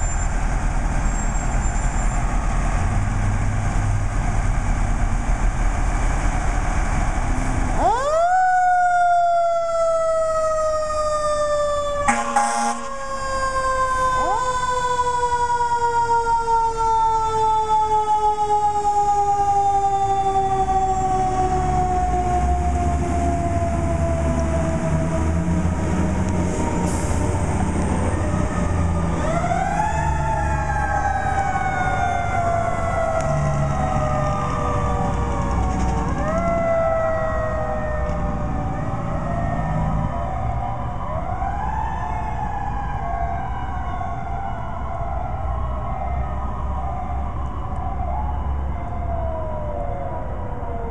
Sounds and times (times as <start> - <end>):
Fire engine, fire truck (siren): 0.0 - 50.9.